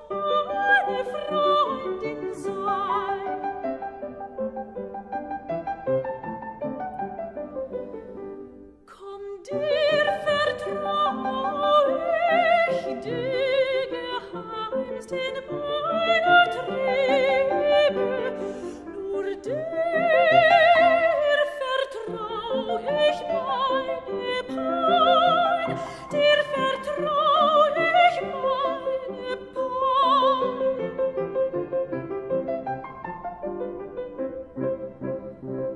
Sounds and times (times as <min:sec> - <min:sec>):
Pizzicato: 0:00.0 - 0:35.7.